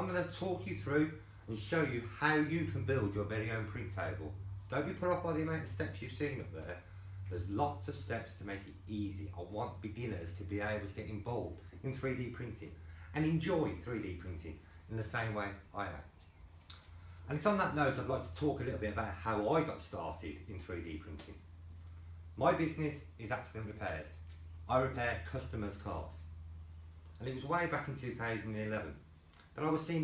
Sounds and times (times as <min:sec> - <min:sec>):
Speech: 0:00.0 - 0:16.1, 0:17.3 - 0:21.5, 0:22.4 - 0:26.3, 0:27.2 - 0:30.0.